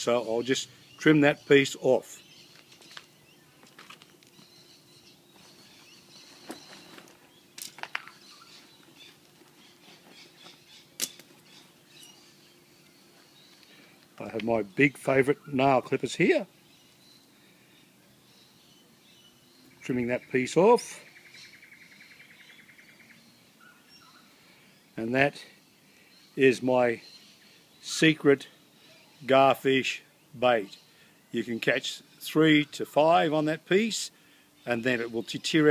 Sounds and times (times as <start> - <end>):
Speech: 0.0 - 2.2, 14.2 - 16.5, 19.8 - 21.1, 25.0 - 25.5, 26.4 - 27.0, 27.8 - 30.8, 31.4 - 35.7
Outside, rural or natural: 0.0 - 35.7
Chirp, tweet: 4.3 - 13.9, 14.6 - 33.4, 34.6 - 35.7.